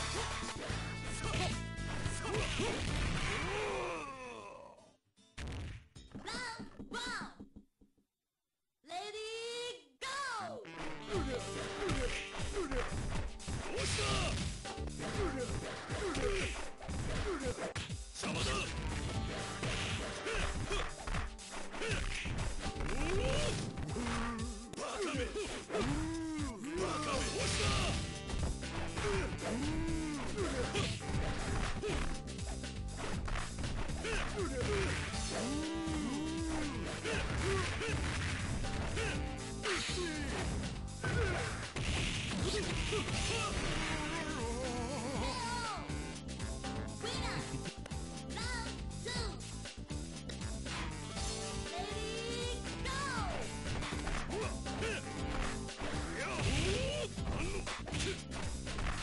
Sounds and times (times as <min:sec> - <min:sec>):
Music: 0:00.0 - 0:04.2, 0:10.0 - 0:59.0
Speech: 0:06.2 - 0:07.4, 0:08.9 - 0:11.3, 0:18.2 - 0:18.7, 0:47.0 - 0:47.5.